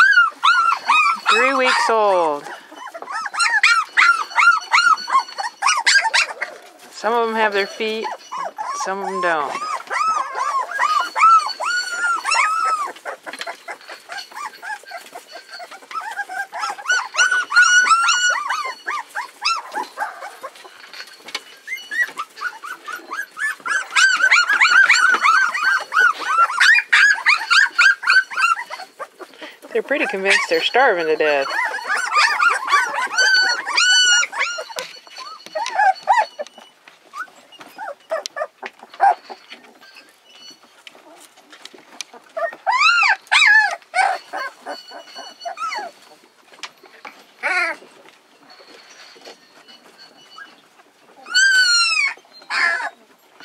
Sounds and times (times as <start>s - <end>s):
Dog: 0.0s - 6.8s, 7.6s - 40.1s, 41.0s - 53.4s
Speech: 1.3s - 2.5s, 7.0s - 8.1s, 8.8s - 9.6s, 29.8s - 31.5s.